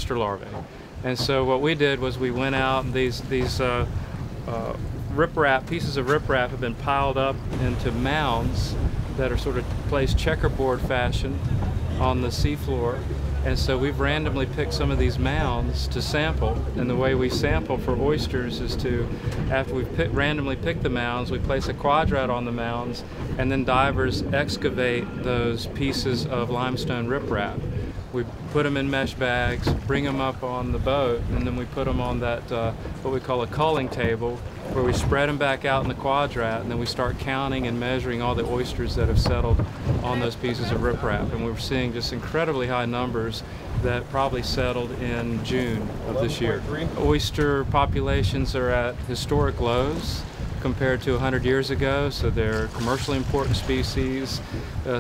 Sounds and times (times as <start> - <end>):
Speech: 0.0 - 3.9, 4.5 - 11.4, 12.0 - 55.0.